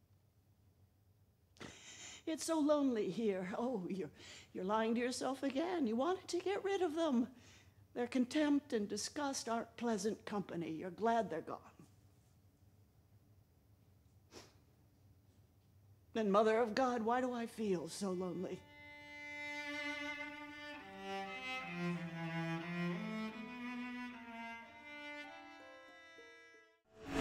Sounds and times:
Speech: 2.3s - 7.4s, 8.0s - 11.8s, 16.2s - 18.7s
Music: 18.6s - 27.2s.

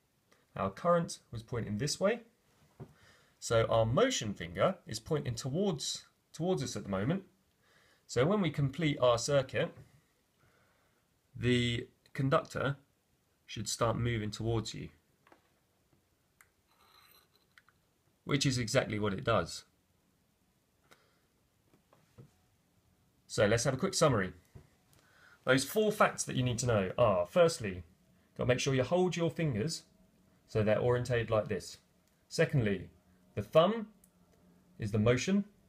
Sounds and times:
Speech: 0.5s - 2.3s, 3.4s - 7.3s, 8.1s - 9.8s, 11.4s - 12.9s, 13.5s - 15.0s, 18.2s - 19.8s, 23.3s - 24.4s, 25.4s - 29.9s, 30.5s - 34.0s, 34.8s - 35.6s.

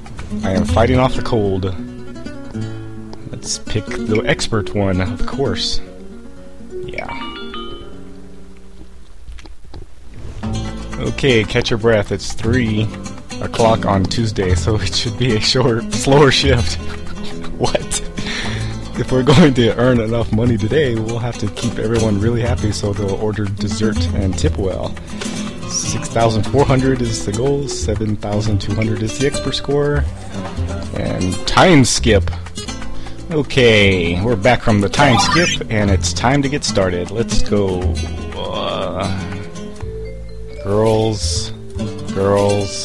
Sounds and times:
Music: 0.0s - 9.1s, 10.2s - 42.8s
Speech: 0.4s - 1.8s, 3.2s - 5.9s, 6.9s - 7.2s, 11.0s - 16.8s, 17.6s - 18.0s, 19.0s - 25.0s, 25.6s - 30.1s, 30.9s - 32.4s, 33.3s - 39.3s, 40.6s - 42.8s.

